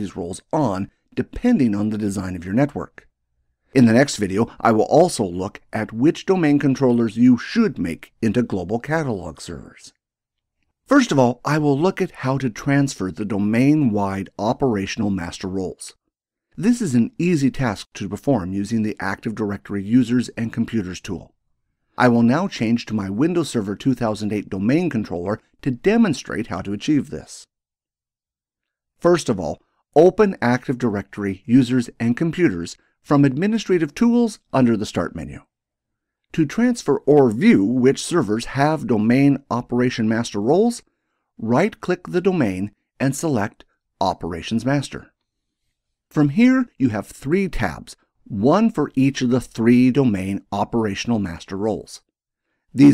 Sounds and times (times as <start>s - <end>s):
Speech: 0.0s - 3.1s, 3.8s - 10.0s, 10.9s - 16.0s, 16.6s - 21.3s, 22.0s - 27.5s, 29.0s - 35.5s, 36.3s - 45.1s, 46.1s - 52.1s.